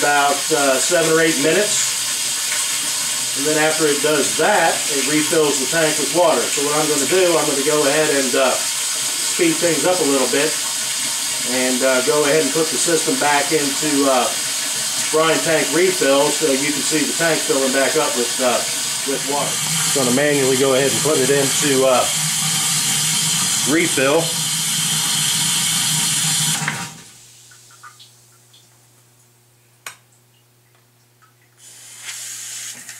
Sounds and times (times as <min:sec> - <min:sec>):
Water: 0:00.0 - 0:28.9, 0:29.9 - 0:31.8.